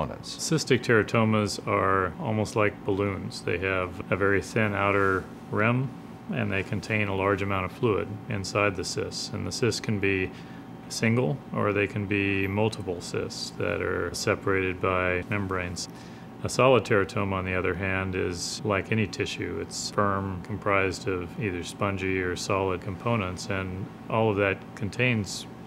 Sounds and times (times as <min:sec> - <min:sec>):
Speech: 0:00.0 - 0:25.6.